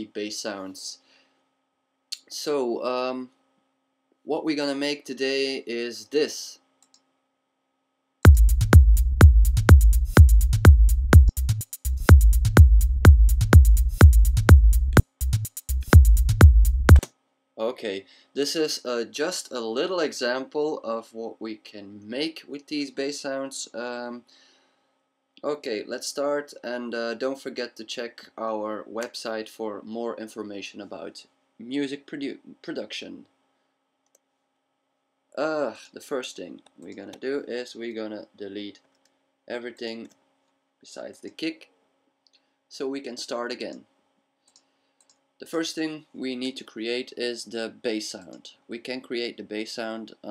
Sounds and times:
Speech: 0:00.0 - 0:01.0, 0:02.2 - 0:03.4, 0:04.3 - 0:06.6, 0:17.6 - 0:24.3, 0:25.4 - 0:33.3, 0:35.4 - 0:38.8, 0:39.5 - 0:40.1, 0:40.8 - 0:41.7, 0:42.7 - 0:43.9, 0:45.4 - 0:50.3
Techno: 0:08.3 - 0:17.1.

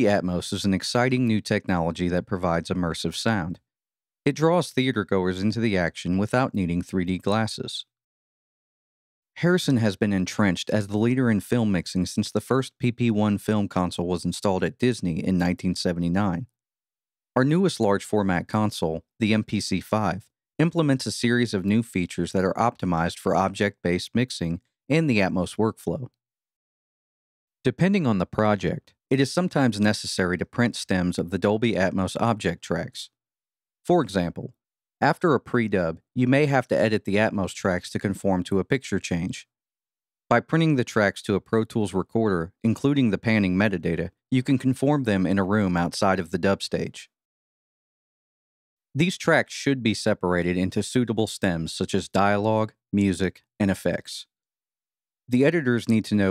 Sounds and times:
Speech: 0:00.0 - 0:03.7, 0:04.3 - 0:08.0, 0:09.4 - 0:16.6, 0:17.4 - 0:26.2, 0:27.6 - 0:33.2, 0:33.8 - 0:39.5, 0:40.3 - 0:47.2, 0:49.0 - 0:54.3, 0:55.3 - 0:56.3.

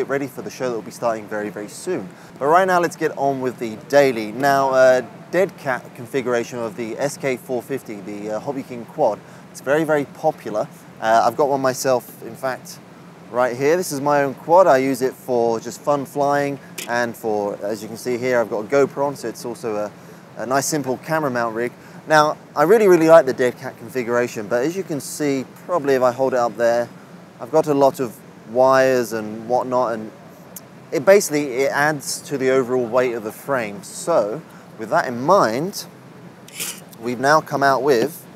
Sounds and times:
Speech: 0:00.0 - 0:30.2, 0:31.0 - 0:35.9, 0:36.5 - 0:38.3.

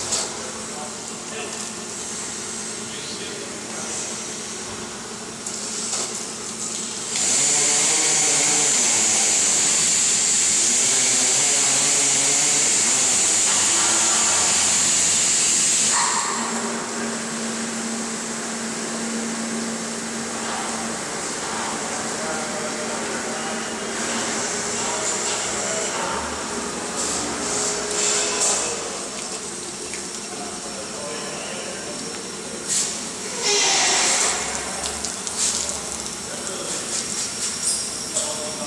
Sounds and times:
Speech: 0:00.2 - 0:01.7, 0:02.8 - 0:04.1, 0:07.4 - 0:09.2, 0:10.8 - 0:14.6, 0:20.4 - 0:26.5, 0:27.4 - 0:29.2, 0:30.3 - 0:34.8, 0:35.5 - 0:37.1, 0:38.1 - 0:38.6.

